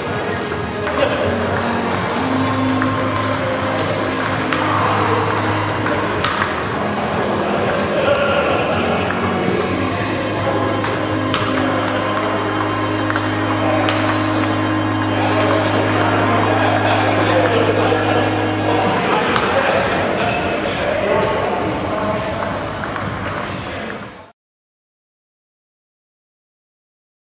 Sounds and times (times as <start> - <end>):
Speech: 7.2 - 9.2, 15.2 - 22.6.